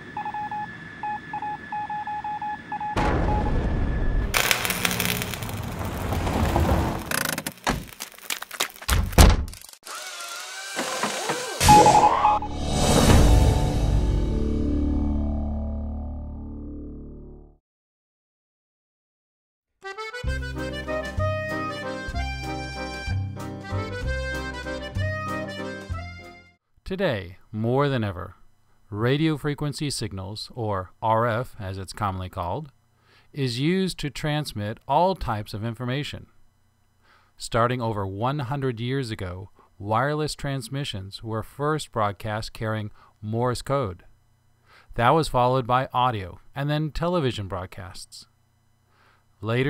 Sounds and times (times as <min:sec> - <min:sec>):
Speech: 0:26.8 - 0:32.8, 0:33.4 - 0:36.3, 0:37.4 - 0:44.1, 0:44.9 - 0:48.3, 0:49.4 - 0:49.7.